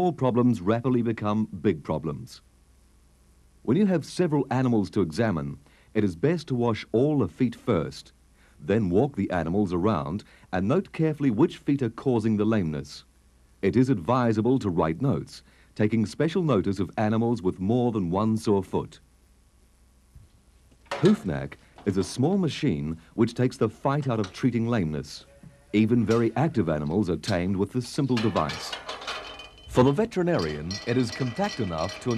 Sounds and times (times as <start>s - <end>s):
Speech: 0.0s - 2.5s, 3.6s - 19.1s, 21.0s - 28.8s, 29.7s - 32.1s.